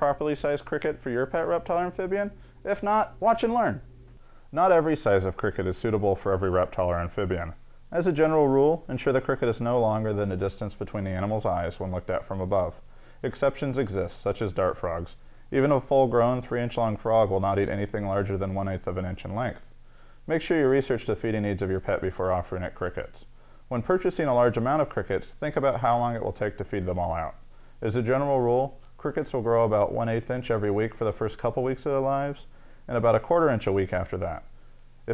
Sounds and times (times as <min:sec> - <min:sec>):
Speech: 0:00.0 - 0:03.8, 0:04.5 - 0:19.7, 0:20.3 - 0:34.5.